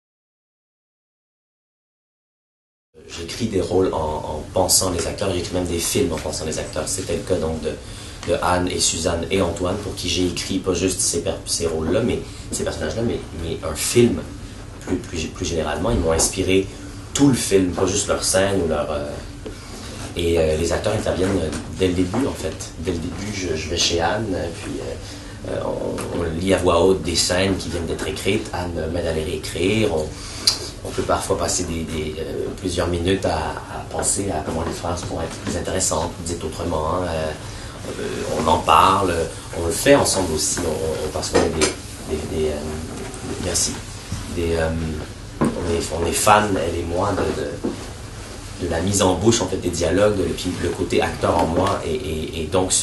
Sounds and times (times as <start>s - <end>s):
Speech: 3.0s - 19.3s, 20.1s - 47.8s, 48.6s - 52.8s.